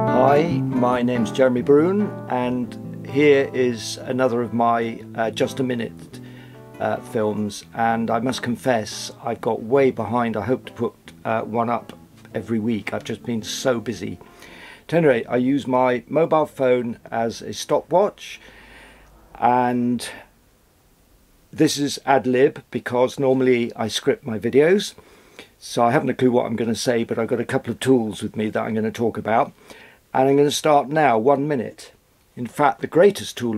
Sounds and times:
Speech: 0.1 - 6.2, 6.8 - 14.2, 14.9 - 18.4, 19.4 - 20.2, 21.6 - 25.0, 25.6 - 33.5.

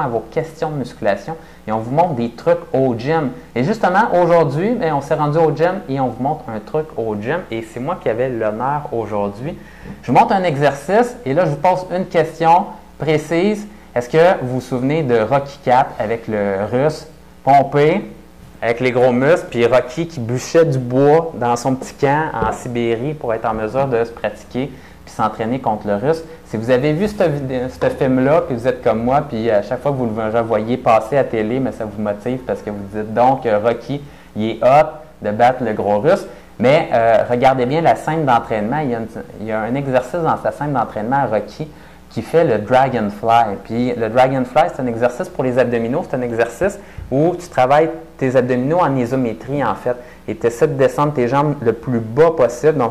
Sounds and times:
Speech: 0.0 - 52.9.

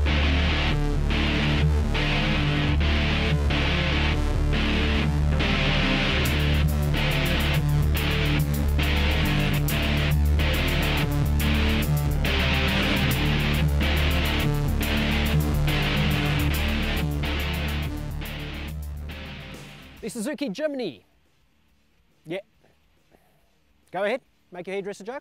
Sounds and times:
Music: 0.0 - 20.3
Speech: 20.0 - 21.1, 22.2 - 22.5, 23.9 - 25.2.

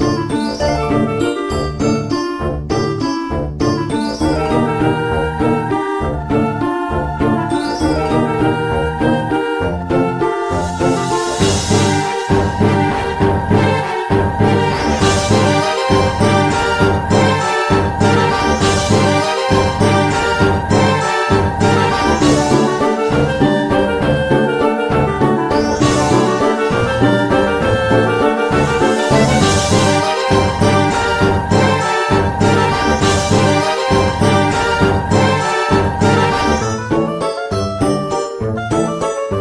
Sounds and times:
Soundtrack music: 4.2 - 39.3.

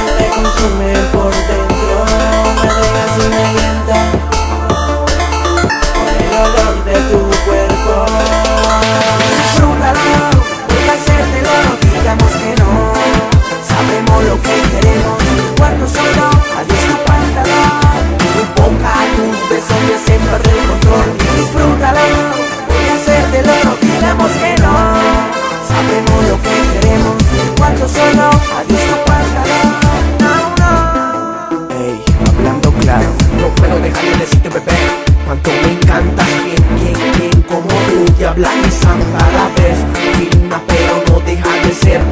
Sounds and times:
Music: 0.0 - 42.1.

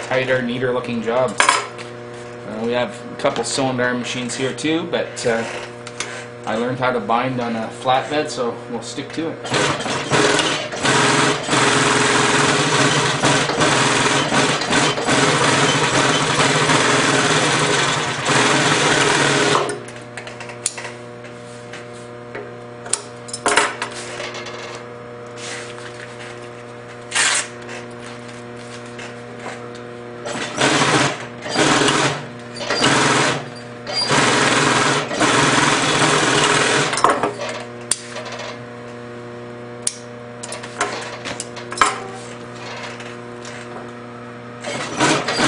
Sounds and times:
Sewing machine: 9.4 - 20.5, 27.1 - 27.5, 30.2 - 38.6, 40.4 - 42.0, 42.6 - 43.7, 44.6 - 45.4.

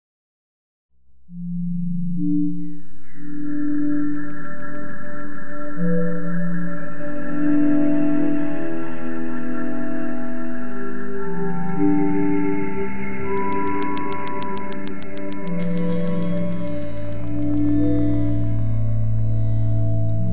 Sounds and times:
Music: 1.0 - 20.3.

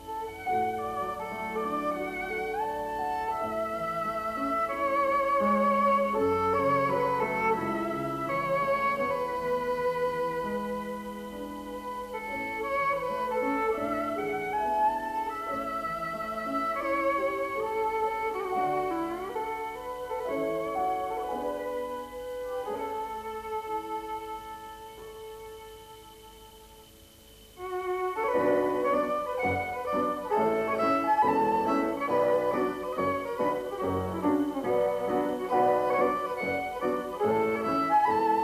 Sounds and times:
Violin, fiddle: 0.0 - 38.4.

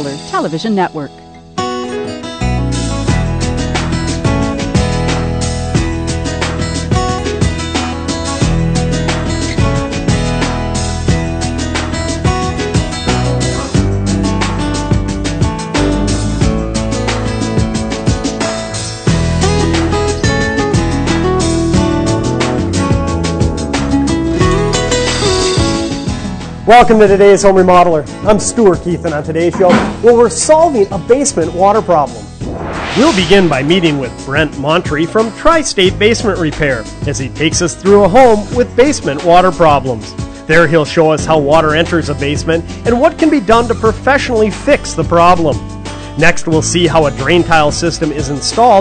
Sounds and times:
Music: 0.0 - 48.8
Speech: 26.7 - 32.2, 33.0 - 45.6, 46.2 - 48.8.

